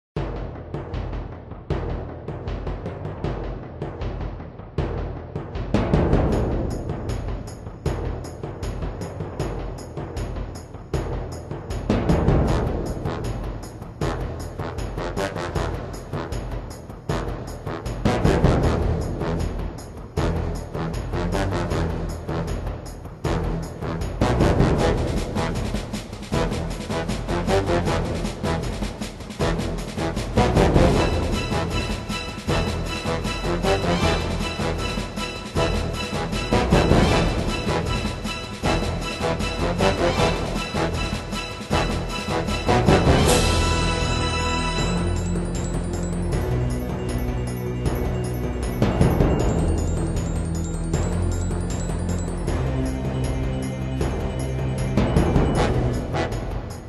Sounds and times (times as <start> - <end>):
Timpani: 0.2 - 56.8.